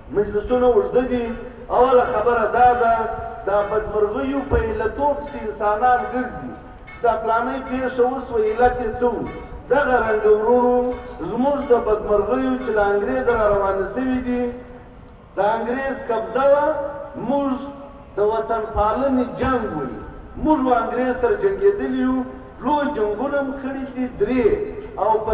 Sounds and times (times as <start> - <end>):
Narration, monologue: 0.0 - 25.3
Male speech, man speaking: 0.1 - 14.6, 15.4 - 25.3.